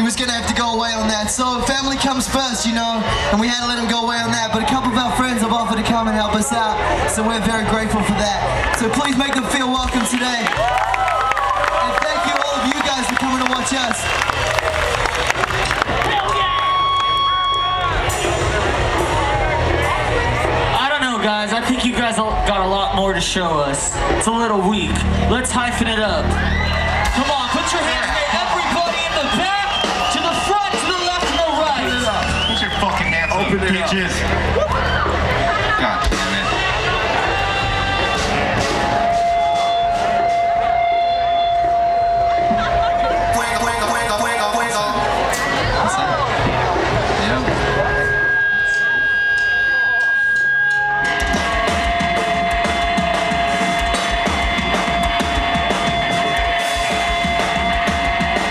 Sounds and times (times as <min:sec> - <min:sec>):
Speech: 0:00.0 - 0:10.6, 0:11.8 - 0:14.1, 0:20.7 - 0:26.4, 0:42.6 - 0:46.4
Music: 0:00.0 - 0:58.5.